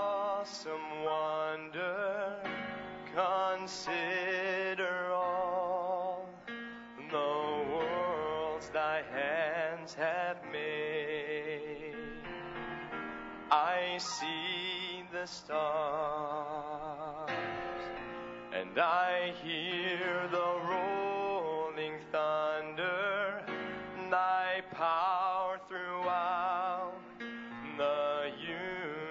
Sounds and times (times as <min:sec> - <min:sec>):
Male singing: 0:00.0 - 0:12.4, 0:13.5 - 0:17.8, 0:18.5 - 0:29.1
Music: 0:00.0 - 0:29.1.